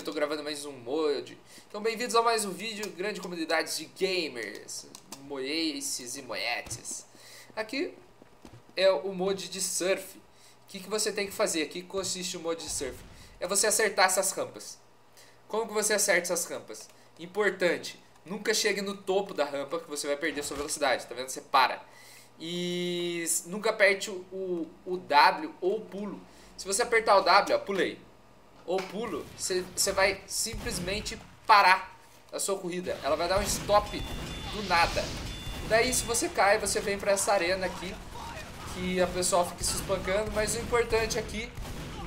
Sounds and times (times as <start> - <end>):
Speech: 0.0 - 8.0, 8.8 - 14.8, 15.5 - 21.8, 22.4 - 35.1, 35.7 - 42.0.